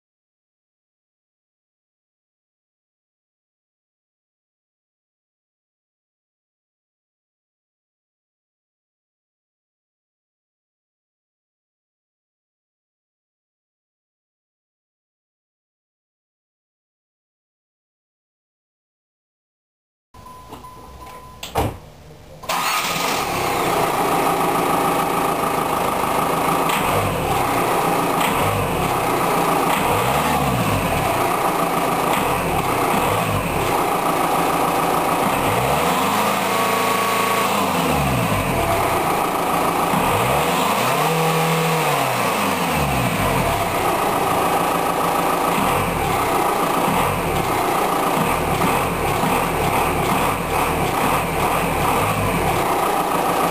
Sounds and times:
Car: 0:22.4 - 0:53.5
Heavy engine (low frequency): 0:22.5 - 0:53.5
Accelerating, revving, vroom: 0:26.6 - 0:31.4, 0:32.1 - 0:34.0, 0:35.2 - 0:43.9, 0:45.5 - 0:53.5.

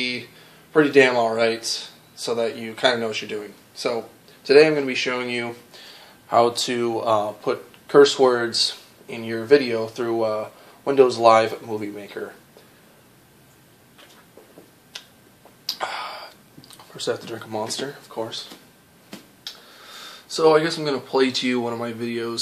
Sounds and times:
Speech: 0:00.0 - 0:05.6, 0:06.3 - 0:12.4, 0:16.8 - 0:18.6, 0:20.3 - 0:22.4.

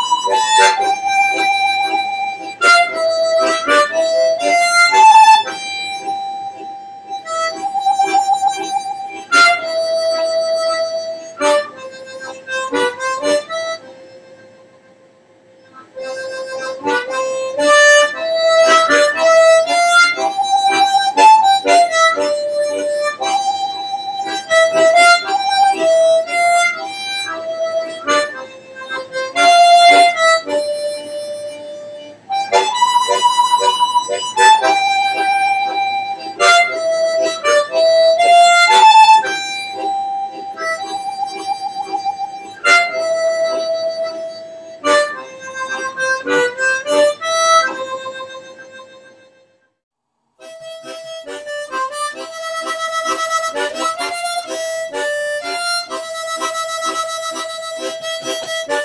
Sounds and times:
Accordion: 0:00.0 - 0:49.7, 0:50.4 - 0:58.8
Harmonica: 0:00.0 - 0:49.8, 0:50.4 - 0:58.8.

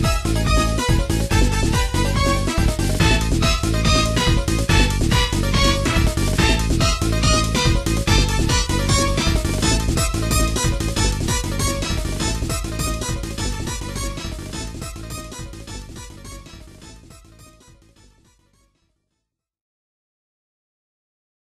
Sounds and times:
Music: 0:00.0 - 0:19.5.

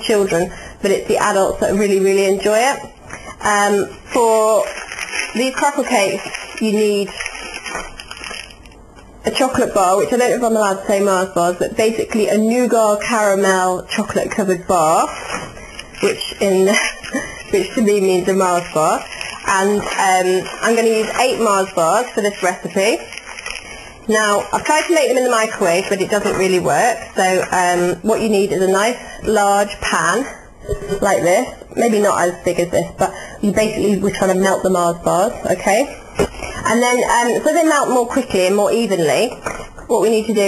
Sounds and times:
Speech: 0:00.0 - 0:07.2, 0:09.2 - 0:15.2, 0:16.0 - 0:17.0, 0:17.6 - 0:23.1, 0:24.1 - 0:36.0, 0:36.6 - 0:40.4
Crackle: 0:03.1 - 0:09.3, 0:15.0 - 0:27.5.

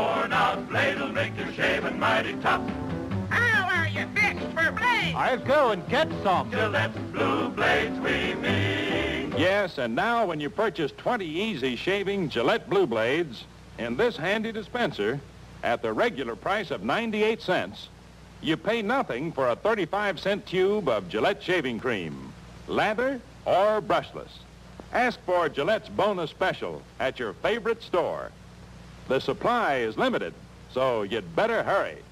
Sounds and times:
Speech: 0:09.4 - 0:28.4, 0:29.1 - 0:32.1.

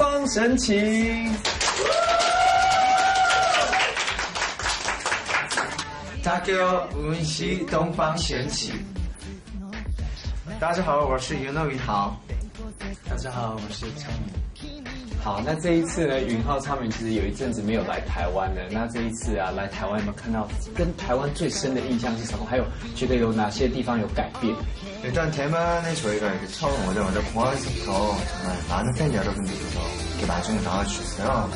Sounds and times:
Music: 0:00.0 - 0:31.5
Speech: 0:06.2 - 0:08.9, 0:10.5 - 0:12.2, 0:15.2 - 0:31.5.

